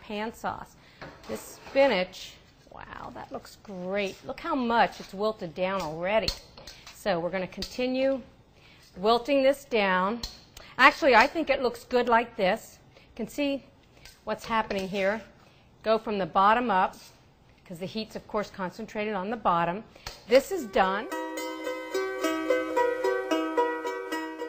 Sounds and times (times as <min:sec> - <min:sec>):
Speech: 0:01.3 - 0:06.3, 0:14.3 - 0:15.3, 0:15.9 - 0:21.1
Zither: 0:20.7 - 0:24.4.